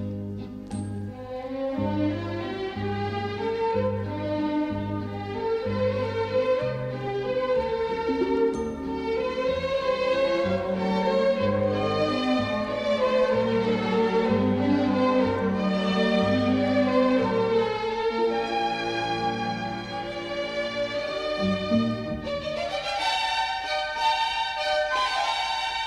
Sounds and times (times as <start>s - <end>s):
Soundtrack music: 8.1s - 22.1s.